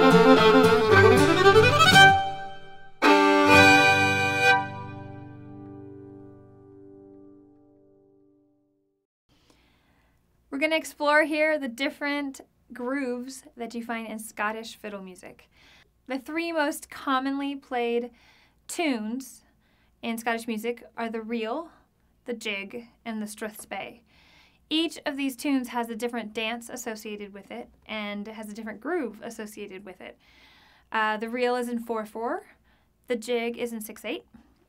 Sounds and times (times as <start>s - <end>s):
Speech: 10.5s - 15.5s, 16.1s - 24.0s, 24.7s - 30.2s, 30.9s - 34.4s.